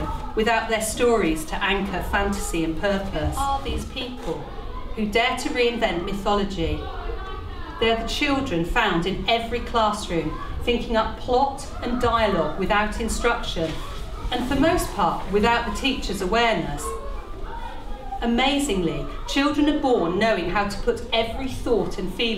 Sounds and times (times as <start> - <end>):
Speech: 0.0 - 22.3.